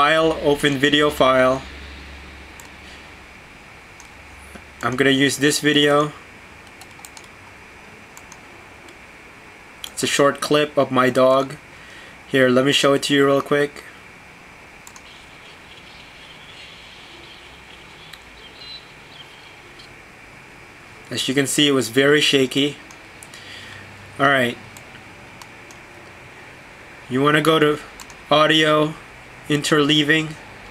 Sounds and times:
Speech: 0.0 - 1.7, 4.8 - 6.2, 9.9 - 11.6, 12.3 - 14.0, 21.1 - 22.8, 24.2 - 24.6, 27.1 - 30.4.

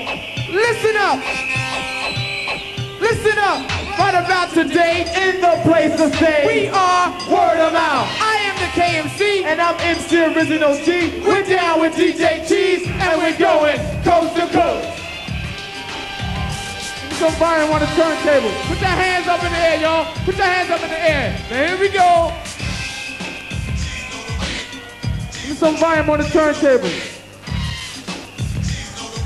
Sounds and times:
Music: 0.0 - 29.2
Speech: 0.5 - 1.3, 3.0 - 15.0, 17.2 - 22.4, 25.4 - 27.1.

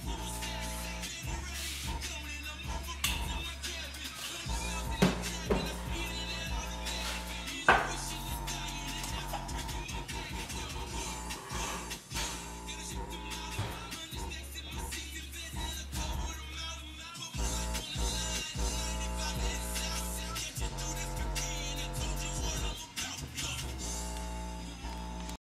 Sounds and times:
Music: 0.0 - 25.4.

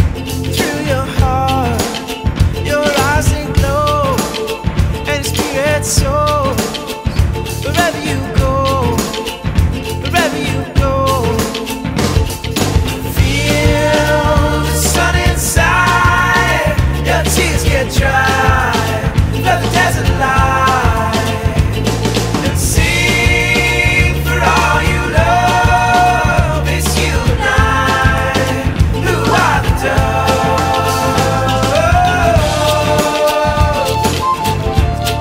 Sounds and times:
Music: 0.0 - 35.2.

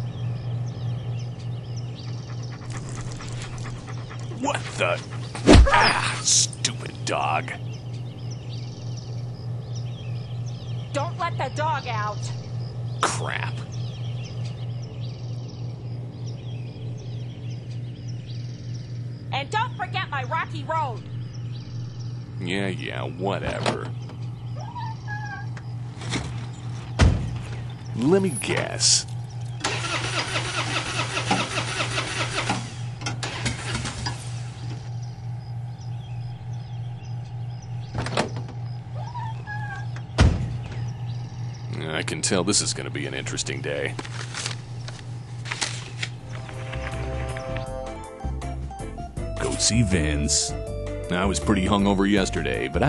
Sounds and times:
Outside, rural or natural: 0.0 - 48.2
Vehicle: 20.5 - 47.7.

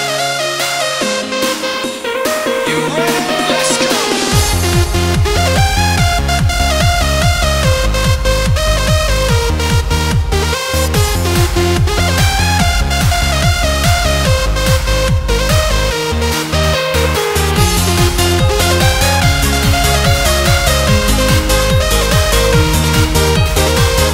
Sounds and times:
Techno: 0.0 - 24.1.

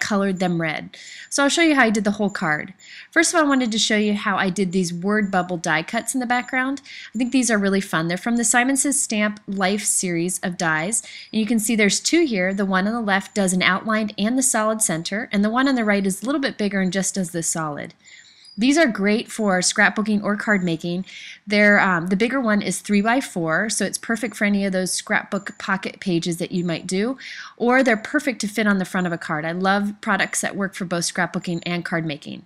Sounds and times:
Speech: 0.0 - 18.0, 18.6 - 32.4.

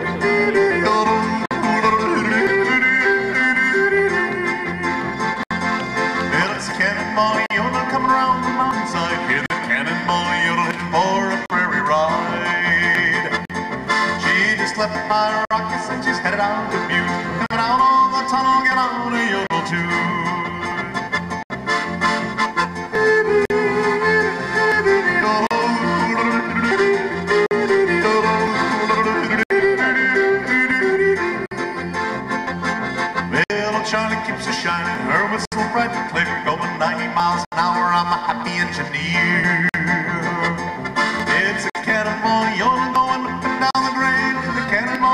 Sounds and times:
Yodeling: 0.0 - 4.8, 23.0 - 31.5
Music: 0.0 - 45.1.

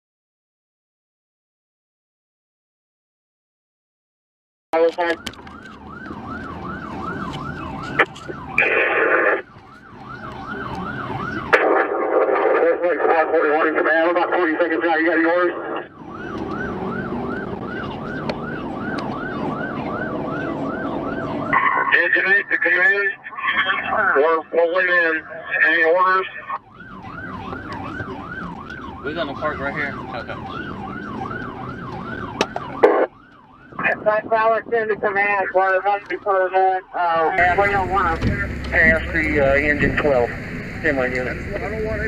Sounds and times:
Speech: 4.8 - 5.3, 12.1 - 15.8, 21.9 - 26.6, 33.8 - 42.0.

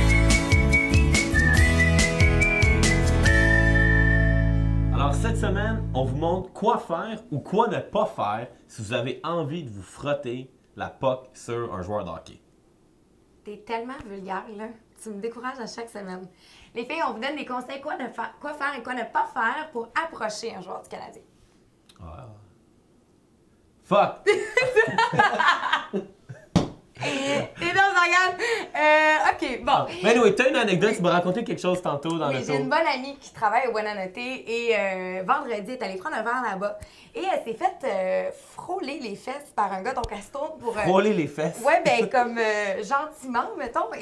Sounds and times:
Speech: 27.0 - 44.0.

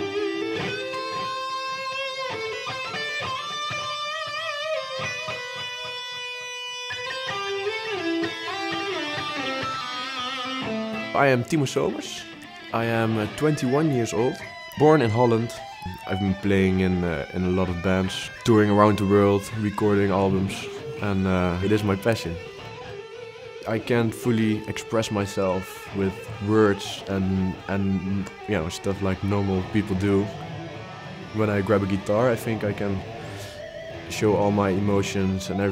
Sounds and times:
Speech: 11.2 - 22.4, 23.6 - 30.3, 31.3 - 33.0, 34.1 - 35.7.

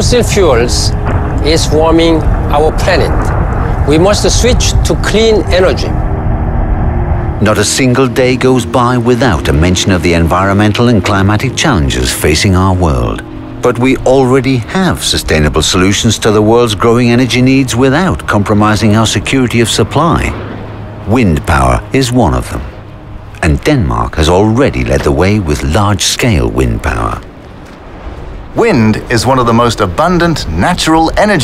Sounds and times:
Speech: 0.0 - 6.0, 7.4 - 20.4, 23.4 - 27.3, 28.6 - 31.4
Music: 0.0 - 31.4.

